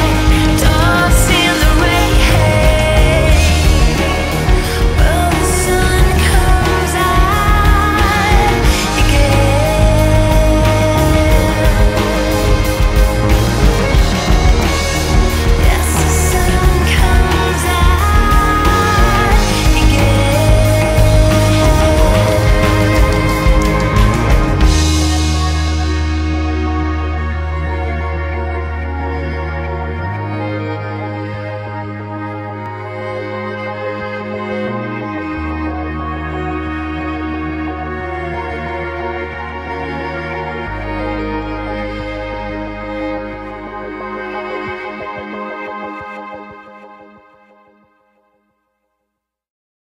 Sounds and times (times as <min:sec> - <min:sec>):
Theme music: 0:00.0 - 0:48.2.